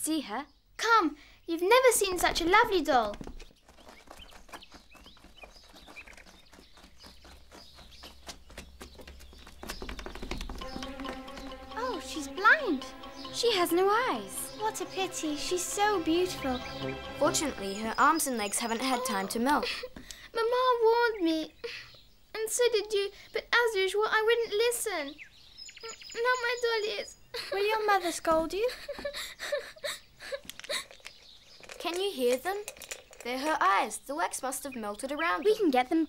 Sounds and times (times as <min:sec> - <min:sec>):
Child speech, kid speaking: 0:00.0 - 0:03.2, 0:11.8 - 0:16.6, 0:17.2 - 0:19.7, 0:20.4 - 0:21.6, 0:22.4 - 0:25.2, 0:26.2 - 0:28.7, 0:31.8 - 0:32.6, 0:33.3 - 0:36.0.